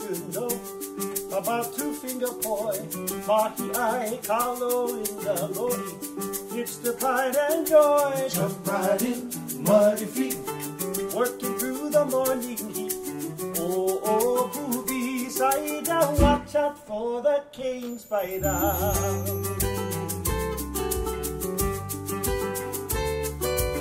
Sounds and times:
Strum: 0:00.0 - 0:16.7, 0:18.4 - 0:23.8
Acoustic guitar: 0:00.0 - 0:23.8.

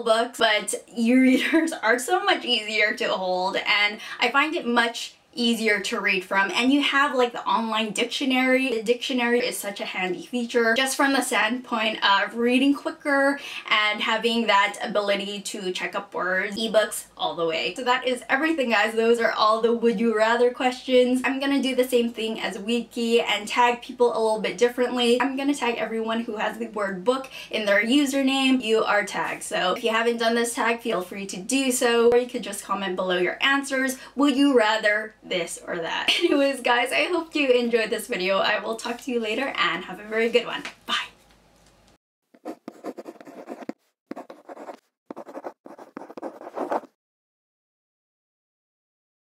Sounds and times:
Speech: 0:00.0 - 0:41.2
Inside, small room: 0:00.0 - 0:47.0.

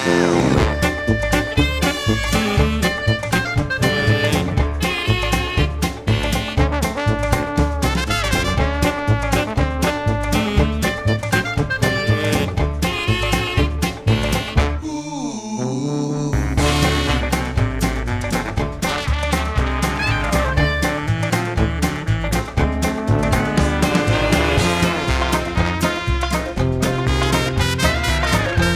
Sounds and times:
Orchestra: 0:00.0 - 0:14.8, 0:16.6 - 0:28.7.

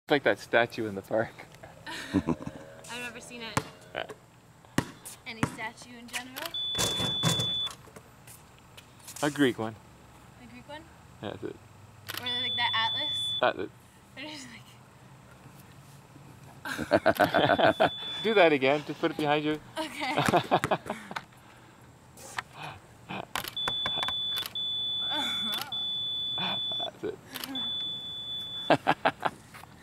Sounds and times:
Basketball bounce: 0:03.6 - 0:03.8, 0:04.8 - 0:05.7, 0:20.2 - 0:20.9.

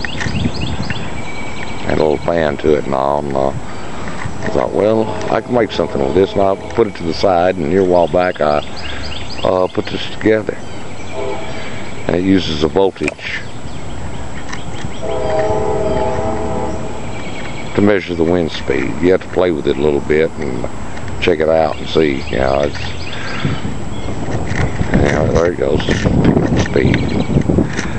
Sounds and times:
Speech: 0:01.9 - 0:03.6, 0:04.5 - 0:08.6, 0:09.4 - 0:10.6, 0:12.1 - 0:13.5, 0:17.8 - 0:22.9, 0:25.0 - 0:27.1.

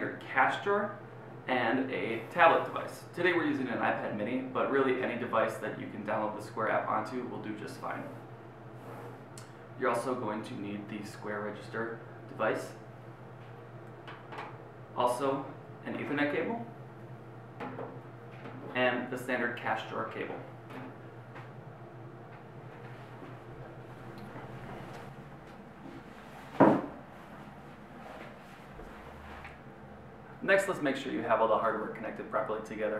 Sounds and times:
Speech: 0:00.0 - 0:08.2, 0:09.8 - 0:12.8, 0:15.0 - 0:16.8, 0:18.7 - 0:20.5, 0:30.4 - 0:32.9.

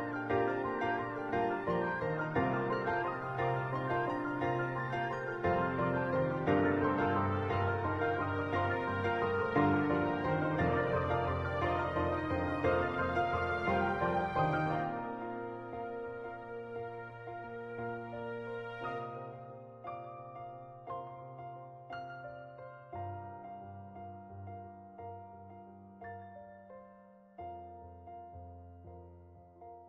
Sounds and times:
Music: 0:00.0 - 0:29.8.

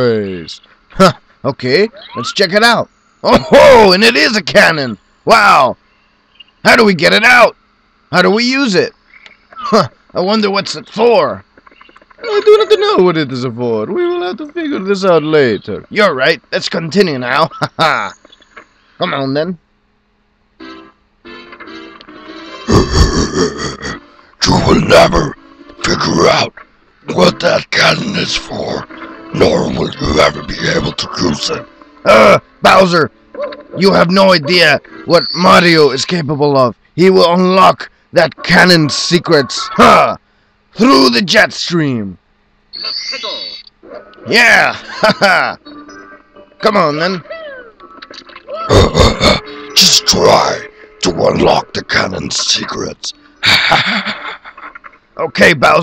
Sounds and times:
Speech: 0:00.0 - 0:05.8, 0:06.6 - 0:08.9, 0:09.6 - 0:11.4, 0:12.2 - 0:18.2, 0:19.0 - 0:19.6, 0:23.7 - 0:26.5, 0:27.1 - 0:33.1, 0:33.8 - 0:40.2, 0:40.8 - 0:42.2, 0:48.6 - 0:53.2, 0:55.2 - 0:55.8
Music: 0:20.6 - 0:22.7, 0:25.4 - 0:25.9, 0:28.4 - 0:30.0, 0:31.0 - 0:33.8, 0:45.5 - 0:48.4.

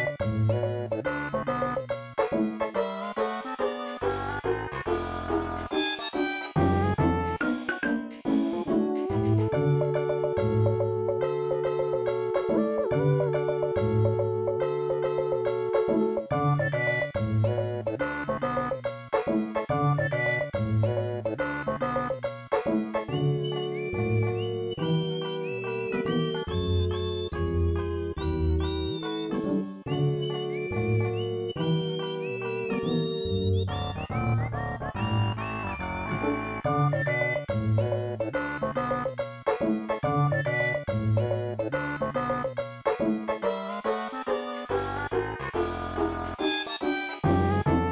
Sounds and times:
Video game music: 0:00.0 - 0:47.9.

